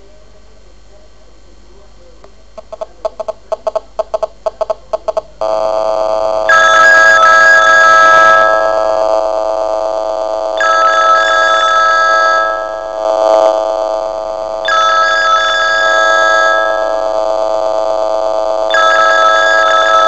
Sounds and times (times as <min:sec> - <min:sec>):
Ringtone: 0:06.5 - 0:08.9, 0:10.6 - 0:13.0, 0:14.7 - 0:17.0, 0:18.7 - 0:20.0
Telephone bell ringing: 0:06.5 - 0:09.0, 0:10.6 - 0:13.0, 0:14.6 - 0:17.1, 0:18.7 - 0:20.0.